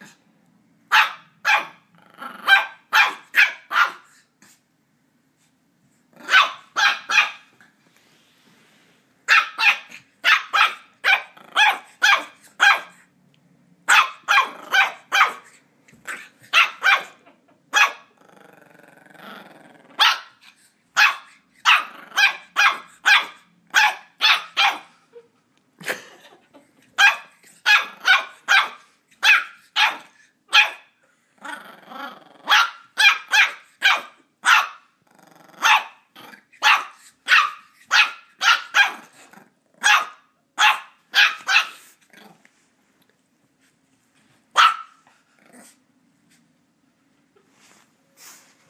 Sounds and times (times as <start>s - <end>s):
Bark: 0.9s - 1.8s, 2.5s - 4.1s, 6.3s - 7.5s, 9.3s - 13.0s, 13.9s - 15.5s, 16.1s - 17.2s, 17.8s - 18.1s, 20.0s - 20.4s, 21.0s - 24.9s, 27.0s - 30.9s, 32.5s - 34.9s, 35.6s - 36.0s, 36.6s - 39.1s, 39.8s - 41.9s, 44.6s - 45.0s.